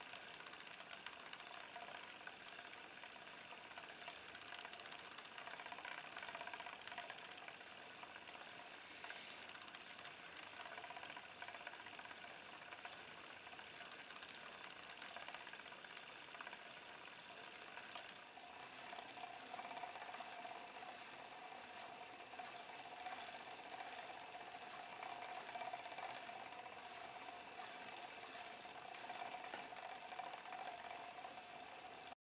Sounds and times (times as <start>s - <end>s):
Inside, small room: 0.0s - 32.2s.